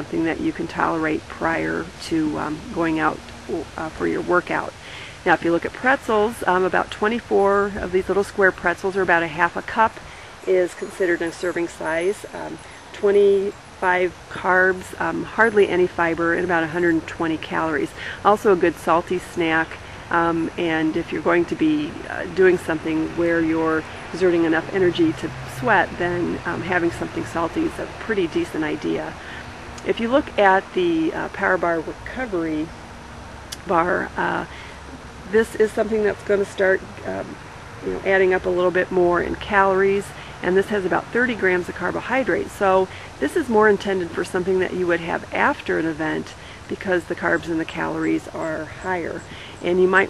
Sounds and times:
Speech: 0.0 - 32.7, 33.6 - 34.7, 35.3 - 50.1
Outside, rural or natural: 0.0 - 50.1.

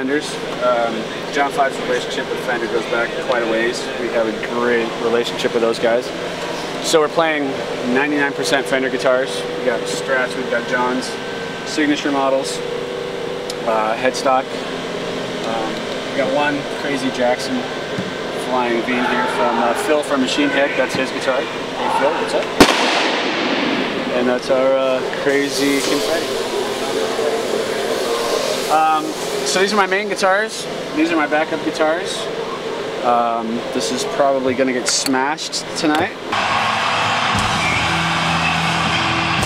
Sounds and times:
Speech: 0.0 - 6.1, 6.8 - 12.6, 13.6 - 14.5, 15.4 - 17.7, 18.4 - 22.5, 24.1 - 32.3, 33.0 - 36.2.

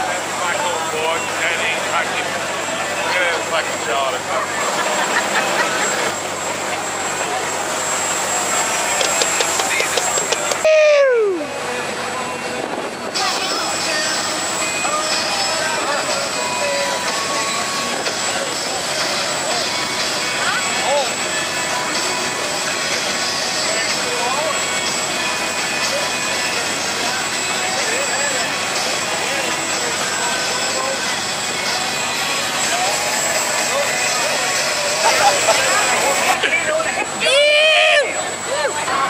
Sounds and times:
Speech: 0.0 - 4.9, 8.3 - 10.6, 13.1 - 14.3, 25.8 - 39.1
Boat, Water vehicle: 0.0 - 39.1
Music: 11.6 - 36.4.

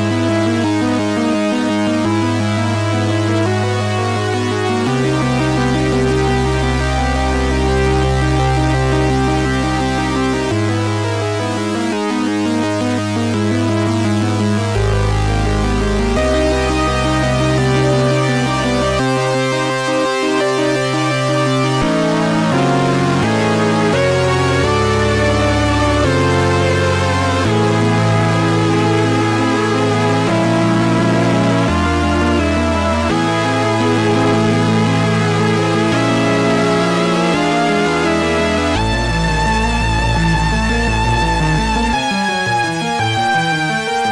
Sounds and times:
Scary music: 0.0 - 44.1.

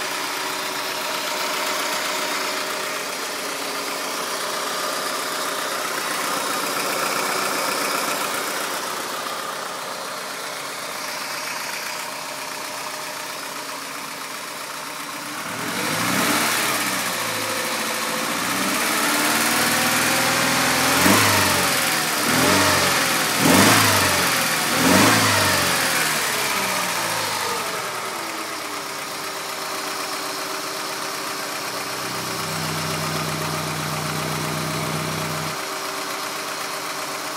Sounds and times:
Medium engine (mid frequency): 0.0 - 37.3
Vehicle: 5.1 - 37.3
Accelerating, revving, vroom: 15.5 - 17.2, 18.3 - 27.6.

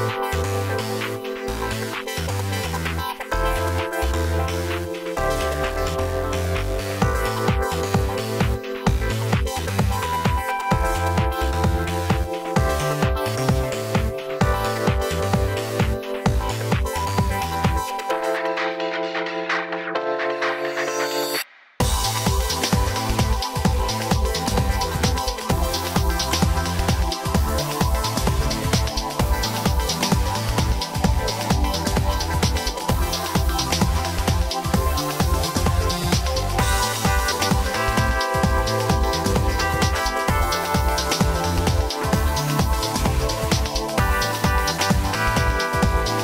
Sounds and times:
Music: 0.0 - 46.2.

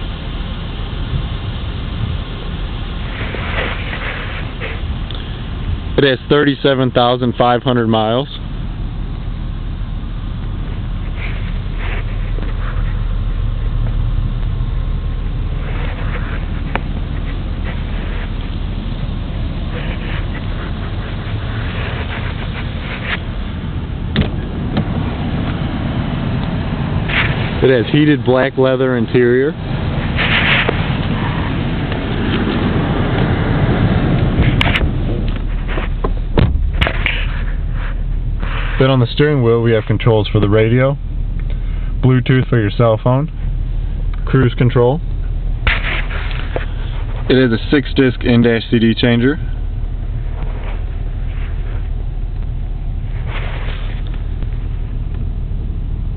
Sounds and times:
Car: 0.0 - 56.1
Outside, urban or manmade: 0.0 - 56.1
Speech: 6.0 - 8.4, 27.6 - 29.6, 38.8 - 41.0, 42.0 - 43.4, 44.2 - 45.1, 47.3 - 49.5.

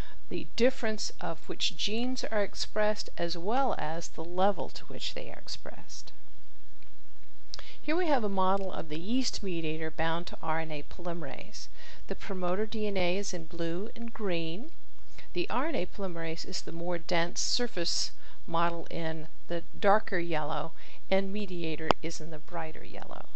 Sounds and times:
Narration, monologue: 0.0 - 23.3.

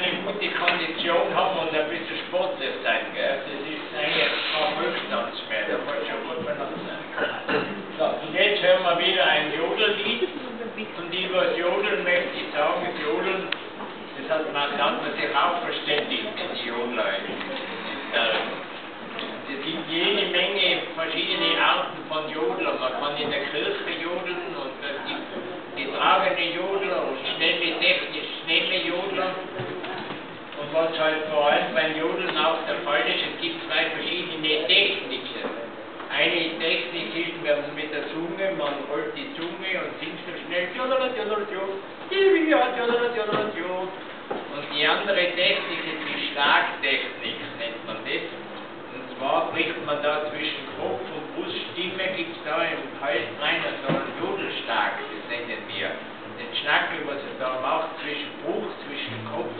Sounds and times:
Speech: 0.0 - 59.5.

